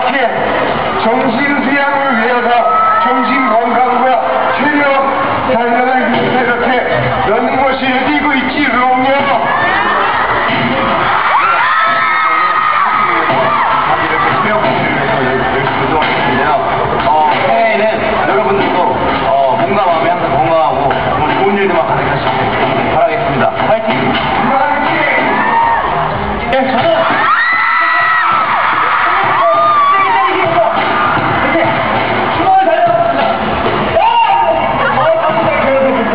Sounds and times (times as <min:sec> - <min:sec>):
Speech: 0:00.0 - 0:09.7, 0:10.8 - 0:25.5, 0:26.4 - 0:27.2, 0:27.8 - 0:30.8, 0:31.4 - 0:36.1
Music: 0:00.0 - 0:36.1.